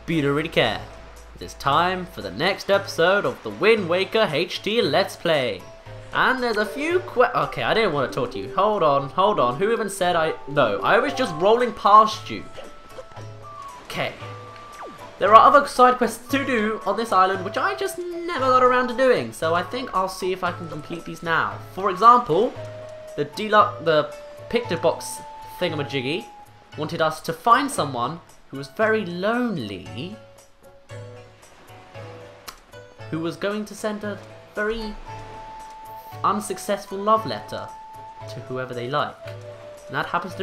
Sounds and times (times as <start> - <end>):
Music: 0.0 - 40.4
Speech: 0.1 - 5.6, 6.2 - 12.6, 13.9 - 14.2, 15.2 - 22.6, 23.2 - 30.2, 33.1 - 35.1, 36.0 - 39.2, 39.9 - 40.4.